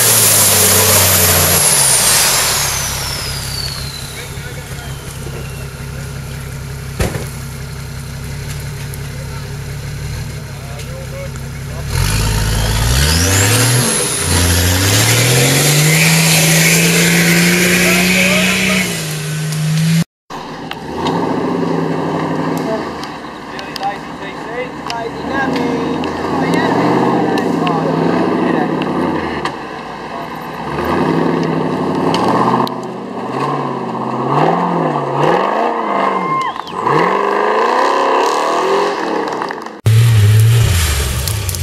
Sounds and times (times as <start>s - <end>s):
Car: 0.0s - 41.6s
Speech: 4.1s - 6.2s, 10.4s - 12.0s, 17.7s - 18.9s, 23.5s - 29.0s.